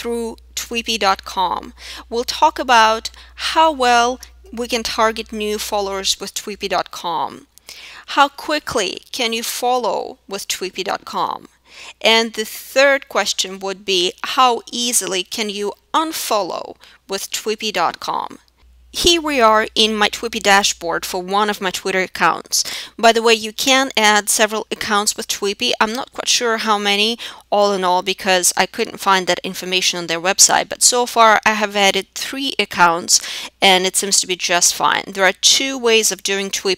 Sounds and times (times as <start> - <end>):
Speech: 0.0 - 7.5, 8.1 - 18.4, 19.0 - 36.7.